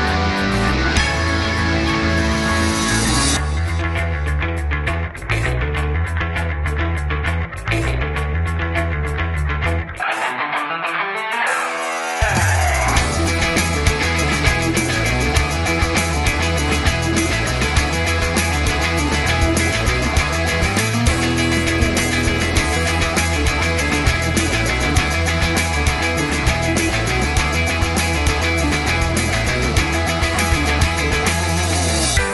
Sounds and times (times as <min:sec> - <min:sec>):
Music: 0:00.0 - 0:32.3.